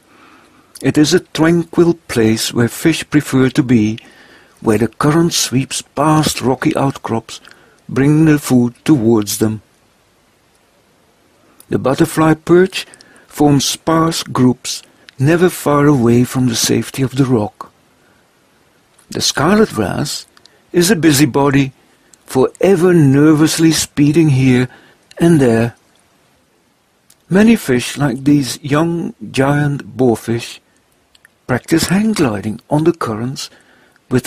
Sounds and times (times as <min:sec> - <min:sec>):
Speech: 0:00.8 - 0:09.6, 0:11.6 - 0:17.8, 0:19.0 - 0:25.8, 0:27.1 - 0:30.6, 0:31.4 - 0:34.2.